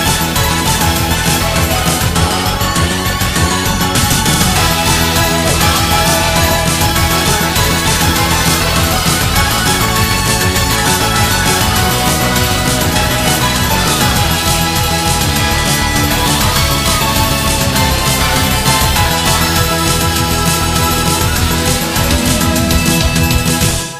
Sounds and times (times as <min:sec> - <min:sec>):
Music: 0:00.0 - 0:23.9.